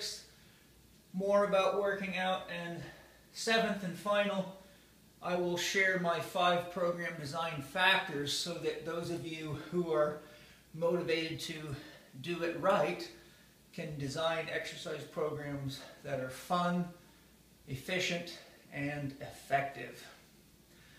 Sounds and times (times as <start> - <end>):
Speech: 0.0 - 0.3, 1.1 - 4.6, 5.2 - 10.2, 10.8 - 17.0, 17.7 - 20.2.